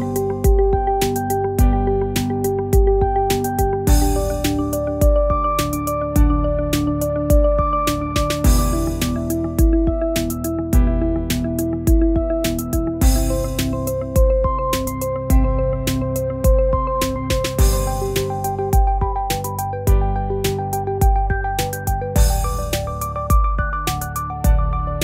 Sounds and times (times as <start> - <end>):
Music: 0.0 - 25.0.